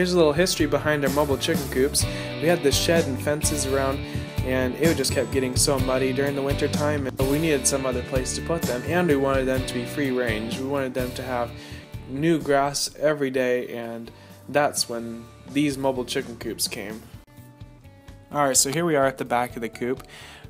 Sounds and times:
Speech: 0.0 - 17.1, 18.3 - 20.0
Music: 0.0 - 20.4.

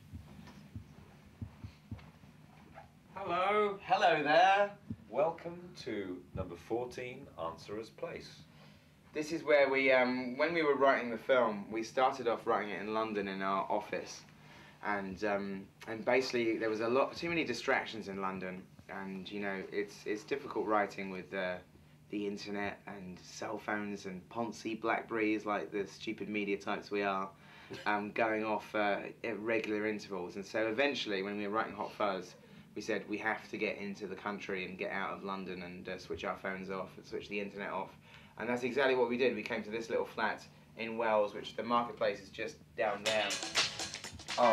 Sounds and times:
Speech: 3.2 - 8.5, 9.1 - 43.5.

